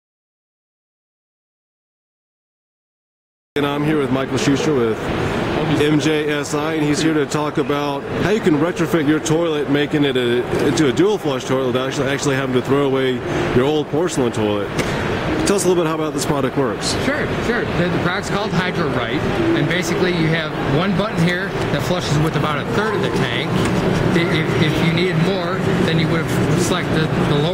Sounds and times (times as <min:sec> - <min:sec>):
Speech: 0:15.4 - 0:23.5, 0:24.1 - 0:27.5.